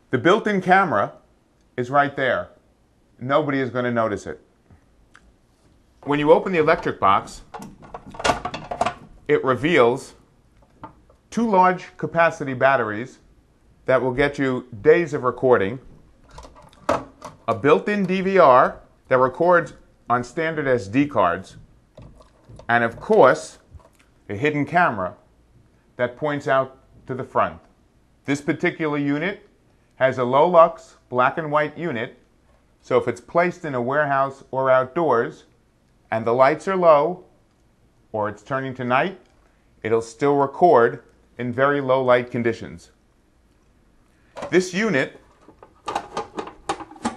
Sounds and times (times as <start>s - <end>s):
Speech: 0.1s - 1.2s, 1.8s - 2.6s, 3.2s - 4.5s, 6.0s - 7.5s, 9.3s - 10.2s, 11.3s - 15.9s, 17.5s - 21.6s, 22.7s - 23.7s, 24.3s - 25.2s, 26.0s - 27.7s, 28.3s - 32.2s, 32.8s - 35.5s, 36.1s - 37.3s, 38.1s - 43.0s, 44.4s - 45.2s.